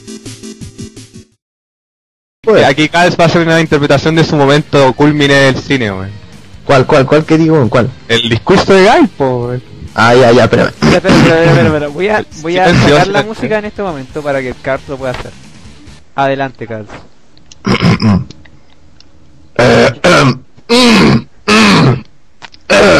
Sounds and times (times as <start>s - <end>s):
Male speech, man speaking: 2.5s - 15.4s, 16.2s - 17.1s.